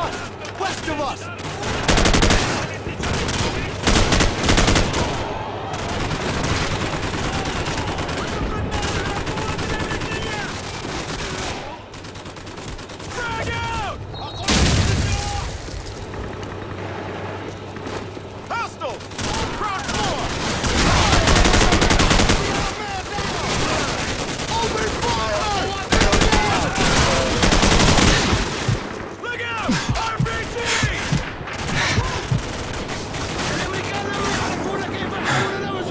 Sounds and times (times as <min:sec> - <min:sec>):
Speech: 0:29.2 - 0:31.2, 0:33.4 - 0:35.9.